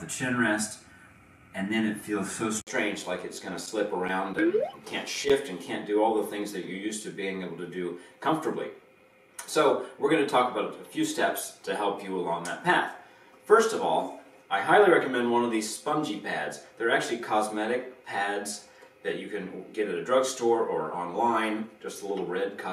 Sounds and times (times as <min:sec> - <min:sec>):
Speech: 0:00.0 - 0:00.8, 0:01.6 - 0:08.8, 0:09.4 - 0:22.7.